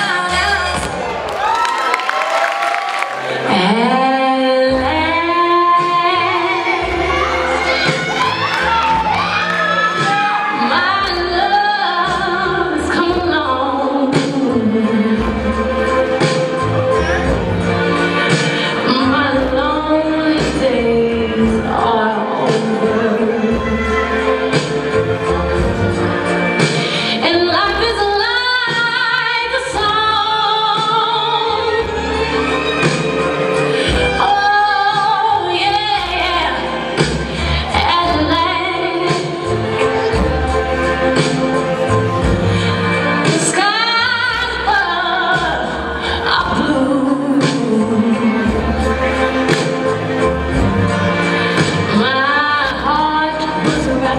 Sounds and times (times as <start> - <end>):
Music: 0.0 - 54.1
Female singing: 3.5 - 9.0, 9.9 - 16.4, 18.8 - 24.7, 27.2 - 32.0, 34.1 - 36.8, 37.4 - 40.4, 43.2 - 49.2, 51.5 - 54.1.